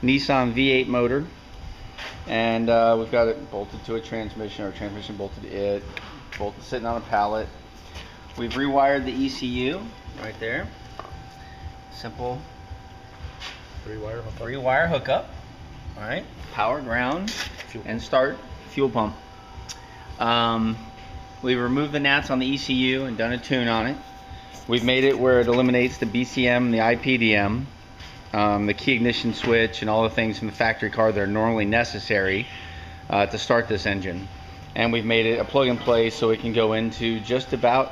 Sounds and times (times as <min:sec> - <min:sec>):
Speech: 0:02.3 - 0:07.5, 0:24.7 - 0:27.7, 0:28.4 - 0:32.4, 0:33.1 - 0:37.9.